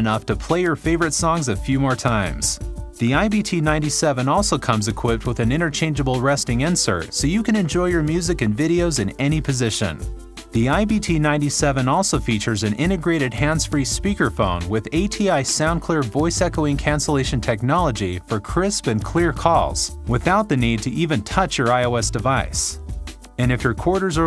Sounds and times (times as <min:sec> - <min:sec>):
Speech: 0:00.0 - 0:22.8, 0:23.4 - 0:24.2
Music: 0:00.0 - 0:24.2.